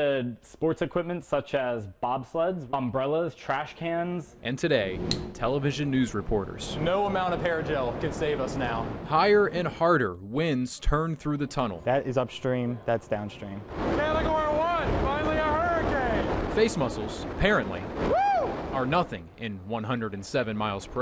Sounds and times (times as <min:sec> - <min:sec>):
Speech: 0:00.0 - 0:17.8, 0:18.8 - 0:21.0.